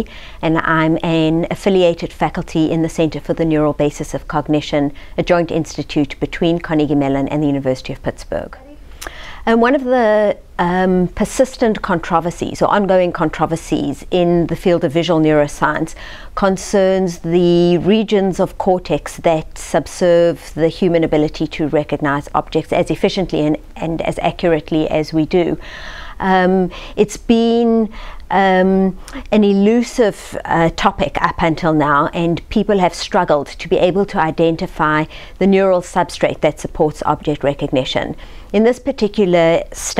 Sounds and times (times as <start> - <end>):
Speech: 0.0 - 8.8, 9.5 - 25.6, 26.2 - 39.9.